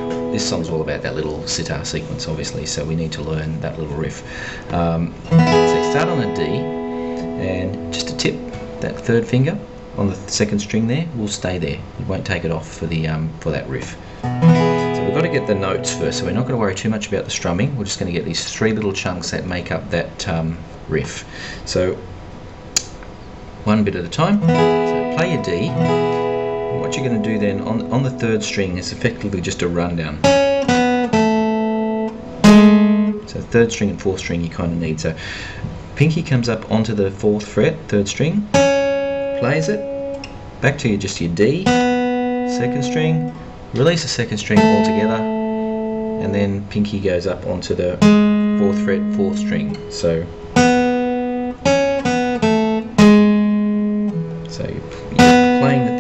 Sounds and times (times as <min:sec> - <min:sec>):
Music: 0:00.0 - 0:11.1, 0:14.2 - 0:17.1, 0:24.3 - 0:33.3, 0:38.4 - 0:46.7, 0:47.8 - 0:56.0
Speech: 0:00.3 - 0:06.7, 0:07.4 - 0:14.0, 0:15.0 - 0:22.1, 0:23.6 - 0:24.4, 0:25.1 - 0:25.8, 0:26.8 - 0:30.3, 0:33.2 - 0:38.5, 0:39.4 - 0:39.8, 0:40.6 - 0:41.7, 0:42.5 - 0:45.3, 0:46.2 - 0:50.3, 0:54.5 - 0:56.0.